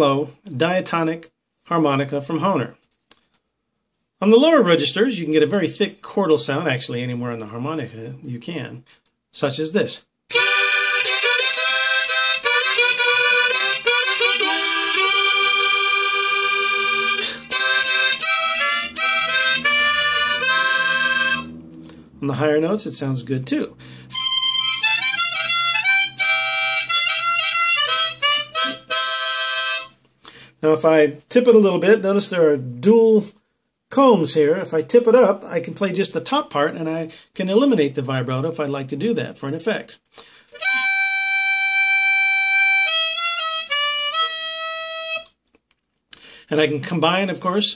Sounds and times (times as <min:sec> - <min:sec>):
Speech: 0:00.0 - 0:02.8, 0:04.2 - 0:10.1, 0:22.2 - 0:23.8, 0:30.6 - 0:40.0, 0:46.5 - 0:47.7
Harmonica: 0:10.3 - 0:30.5, 0:40.2 - 0:45.4.